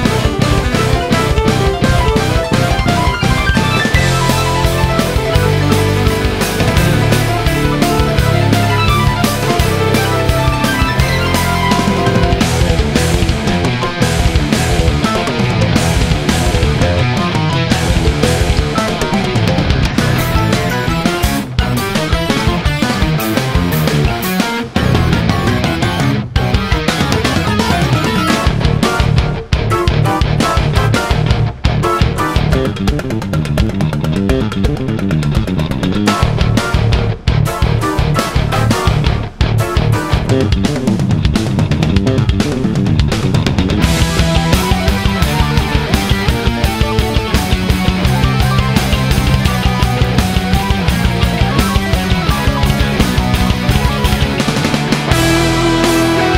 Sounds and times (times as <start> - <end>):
Bass guitar: 0.0 - 56.3.